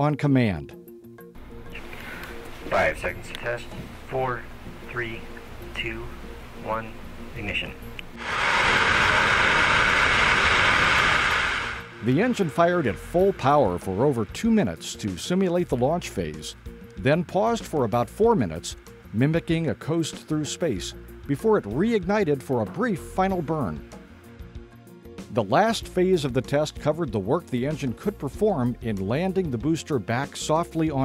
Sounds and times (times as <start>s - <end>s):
Speech: 0.0s - 0.8s, 2.7s - 7.8s, 12.0s - 23.8s, 25.3s - 31.0s
Music: 0.0s - 31.0s
Jet engine: 8.2s - 14.2s.